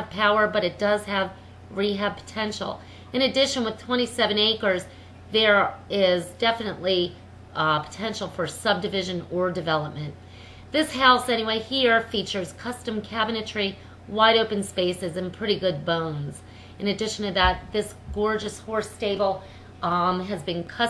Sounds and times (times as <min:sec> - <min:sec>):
Speech: 0:00.0 - 0:20.8.